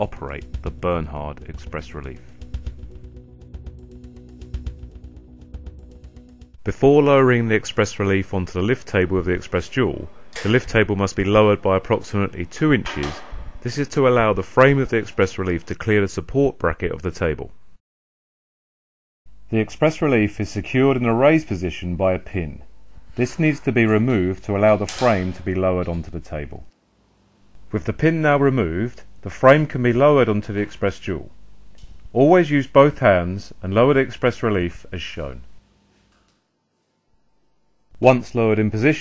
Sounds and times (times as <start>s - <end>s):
Speech: 0.0s - 2.3s, 6.6s - 17.6s, 19.5s - 26.7s, 27.7s - 31.4s, 32.1s - 35.5s, 38.0s - 39.0s.